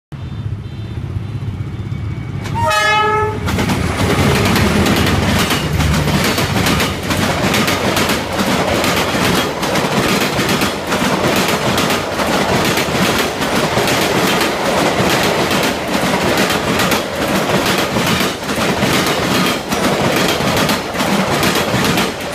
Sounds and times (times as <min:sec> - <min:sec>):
Railroad car, train wagon: 0:00.1 - 0:22.3
Train horn: 0:02.4 - 0:03.5
Clickety-clack: 0:03.4 - 0:22.3.